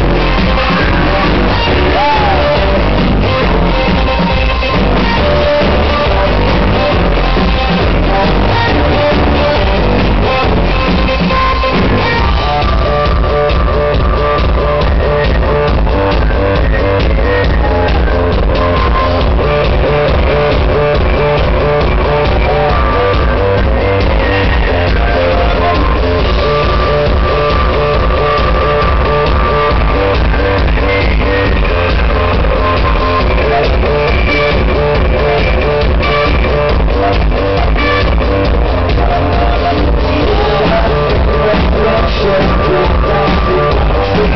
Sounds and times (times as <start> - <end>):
Music: 0.0 - 44.3.